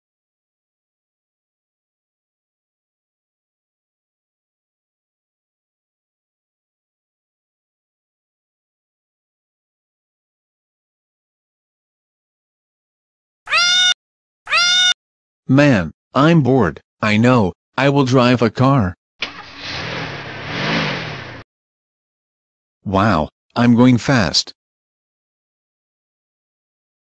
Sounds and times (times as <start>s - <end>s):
Speech: 15.5s - 19.0s, 22.9s - 24.6s.